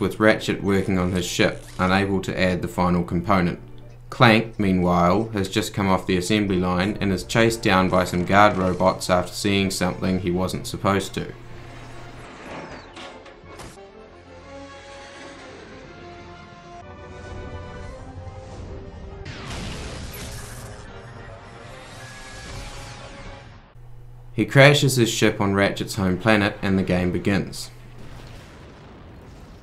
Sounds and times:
Speech: 0.0s - 11.4s, 24.4s - 27.8s
Music: 0.5s - 23.8s.

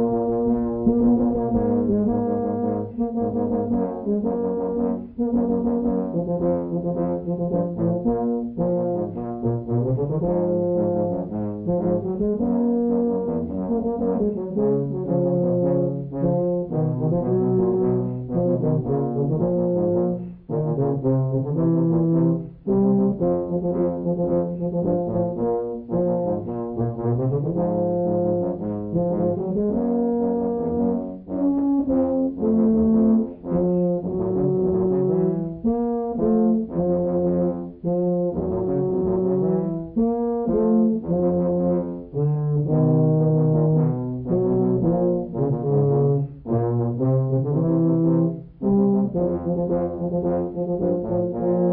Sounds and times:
Music: 0.0s - 51.7s.

